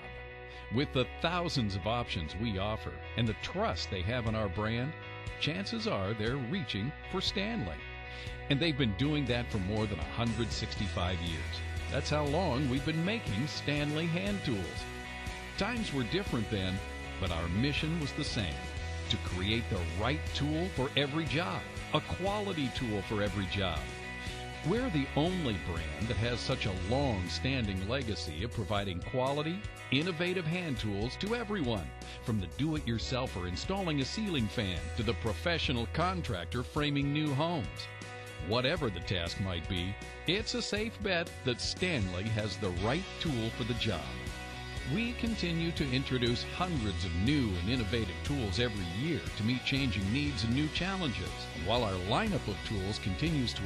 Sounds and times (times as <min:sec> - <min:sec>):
Music: 0:00.0 - 0:53.6
Speech: 0:00.7 - 0:07.8, 0:08.5 - 0:14.8, 0:15.6 - 0:23.9, 0:24.6 - 0:44.2, 0:44.9 - 0:53.6.